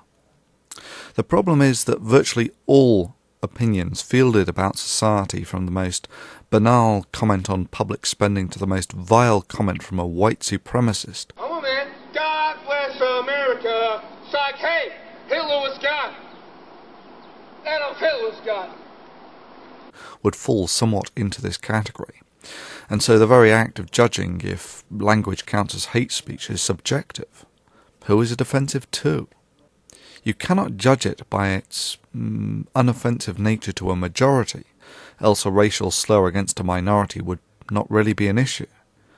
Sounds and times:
Male speech, man speaking: 0:01.2 - 0:16.3, 0:17.7 - 0:18.8, 0:20.2 - 0:22.2, 0:22.9 - 0:27.3, 0:28.0 - 0:29.3, 0:30.2 - 0:38.7.

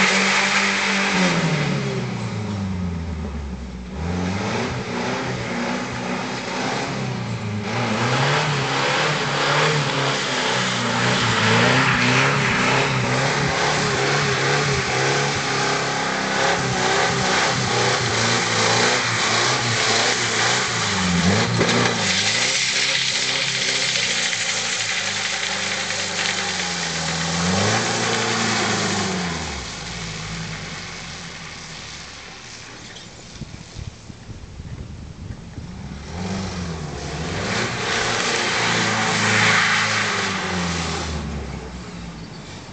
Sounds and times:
Car: 0:00.0 - 0:42.7.

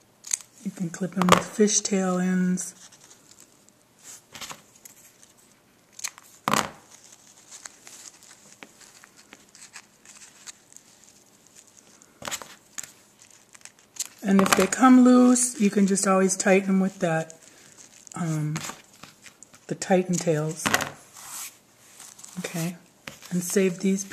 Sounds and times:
Inside, small room: 0:00.0 - 0:24.1
Speech: 0:00.6 - 0:02.8, 0:14.2 - 0:17.4, 0:18.2 - 0:18.7, 0:19.7 - 0:20.7, 0:22.4 - 0:24.1.

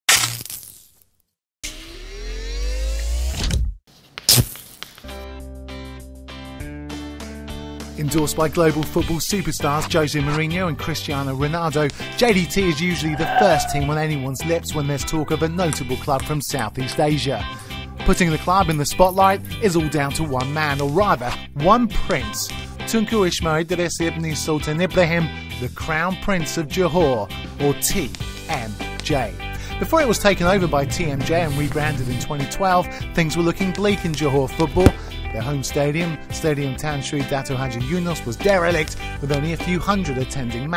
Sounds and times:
Music: 0:05.0 - 0:40.7
Speech: 0:08.0 - 0:40.7.

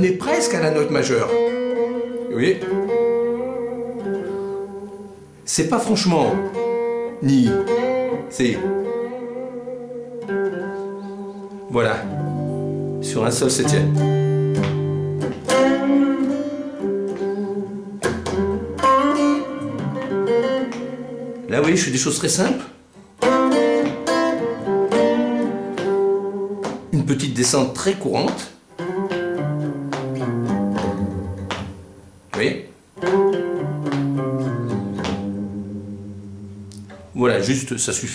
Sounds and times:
Speech: 0:00.0 - 0:01.4, 0:02.3 - 0:02.7, 0:05.5 - 0:06.5, 0:07.2 - 0:07.7, 0:08.3 - 0:08.7, 0:11.7 - 0:12.1, 0:13.0 - 0:14.0, 0:21.5 - 0:22.8, 0:26.9 - 0:28.6, 0:32.3 - 0:32.7, 0:37.2 - 0:38.1
Electric guitar: 0:00.0 - 0:38.1.

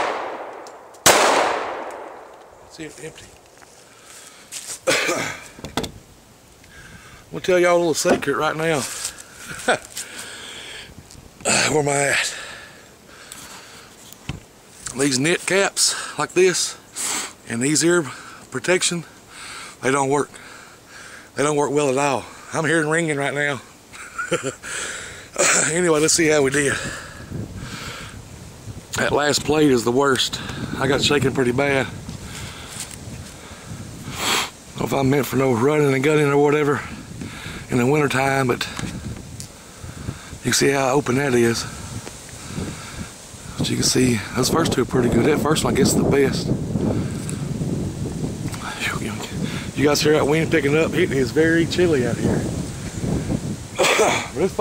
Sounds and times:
Outside, rural or natural: 0:00.0 - 0:54.6
Speech: 0:02.7 - 0:03.3, 0:07.3 - 0:08.9, 0:11.5 - 0:12.3, 0:14.9 - 0:16.8, 0:17.5 - 0:19.1, 0:19.8 - 0:20.3, 0:21.4 - 0:23.6, 0:25.4 - 0:26.9, 0:29.0 - 0:31.9, 0:34.8 - 0:36.9, 0:37.7 - 0:38.7, 0:40.4 - 0:41.7, 0:43.6 - 0:46.5, 0:48.6 - 0:52.4, 0:54.0 - 0:54.6.

